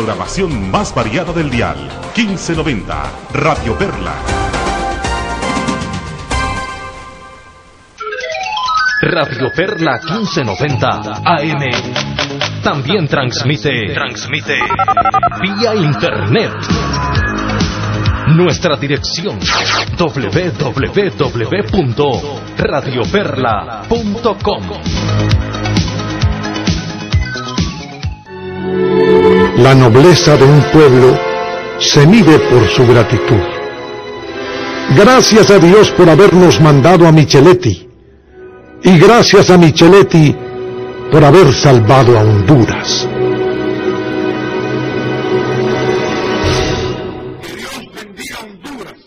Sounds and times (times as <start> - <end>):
Speech: 0.0 - 4.3, 9.0 - 11.9, 12.6 - 14.6, 20.0 - 24.9, 29.6 - 31.2, 31.8 - 33.4, 34.9 - 37.9, 38.9 - 40.4, 41.2 - 43.1, 47.4 - 49.0
Music: 0.0 - 48.3.